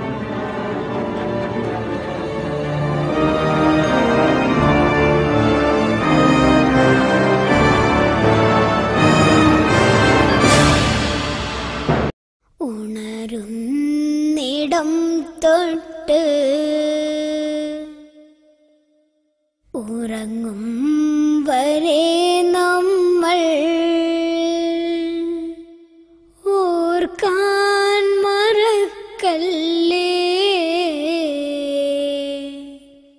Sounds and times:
Music: 0.0s - 12.2s.

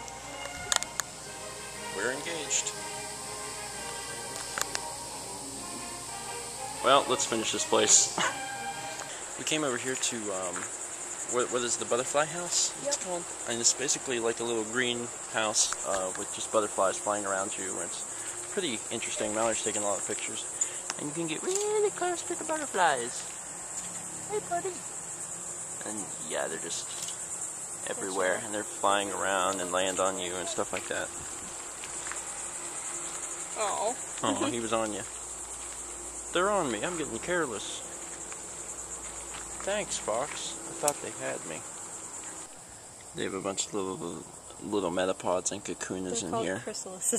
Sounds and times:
Cricket: 0.0s - 47.1s.

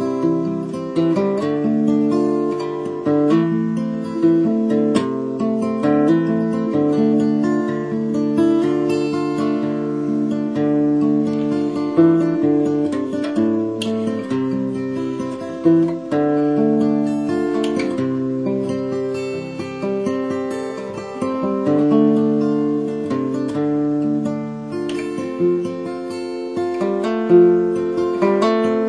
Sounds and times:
Acoustic guitar: 0.0s - 28.8s
Strum: 0.0s - 28.8s.

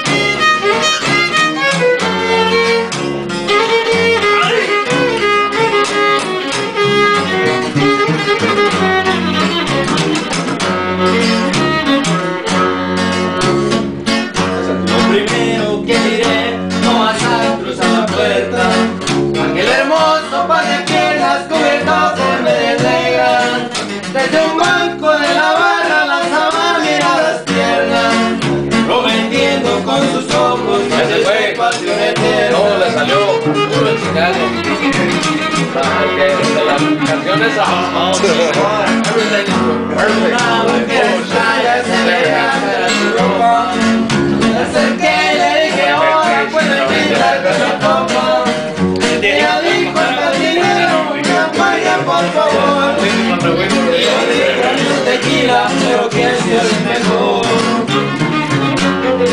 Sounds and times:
Musical instrument: 0.0s - 59.3s.

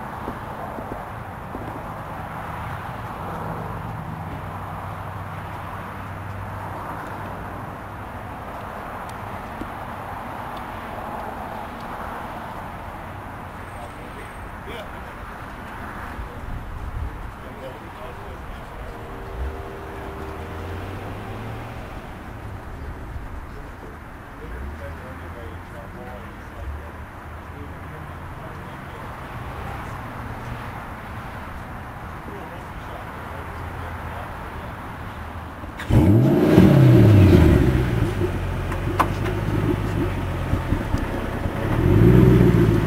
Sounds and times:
Vehicle: 0.0s - 42.8s
Speech: 13.7s - 15.2s, 17.4s - 19.4s, 22.8s - 30.1s, 32.2s - 34.9s.

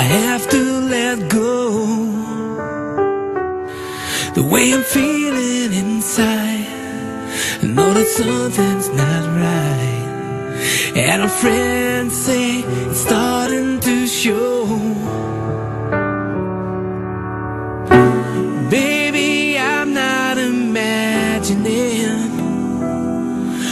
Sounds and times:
Music: 0.0s - 23.7s.

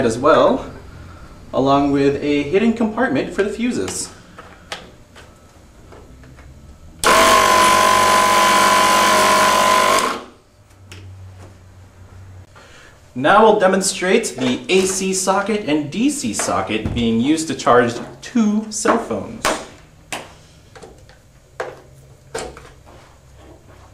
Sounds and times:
Speech: 0.0s - 0.7s, 1.5s - 4.1s, 13.2s - 19.6s.

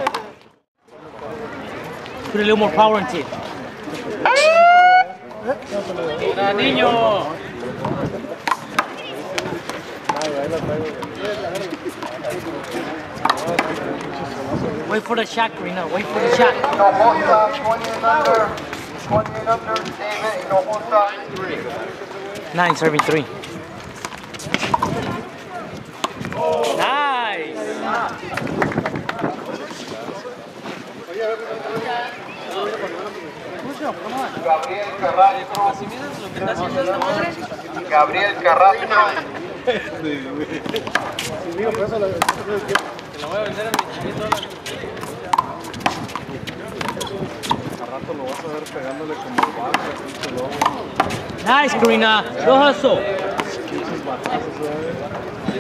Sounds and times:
Speech: 5.3s - 23.6s, 24.4s - 55.6s.

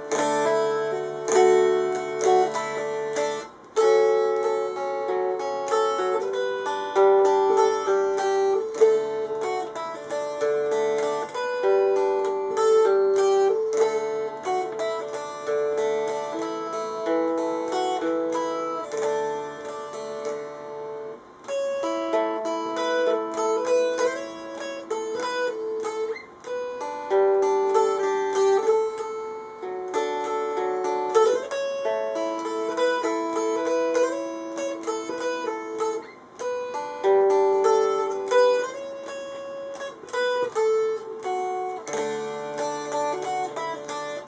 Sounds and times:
Guitar: 0.0s - 44.2s
Inside, small room: 0.0s - 44.2s.

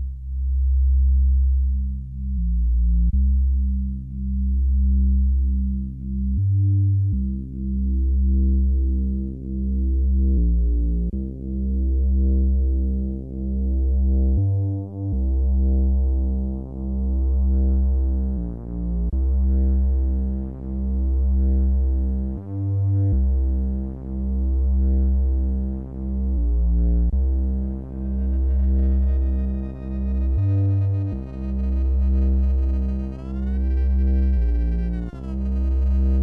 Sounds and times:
Music: 0.0s - 36.2s.

